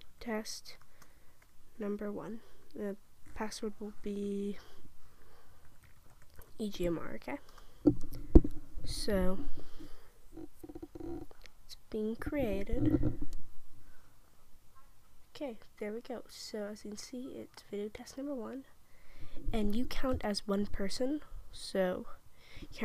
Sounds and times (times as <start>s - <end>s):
Speech: 0.2s - 0.8s, 1.8s - 4.7s, 6.6s - 7.5s, 8.9s - 9.5s, 11.0s - 13.0s, 15.4s - 18.7s, 19.5s - 22.2s.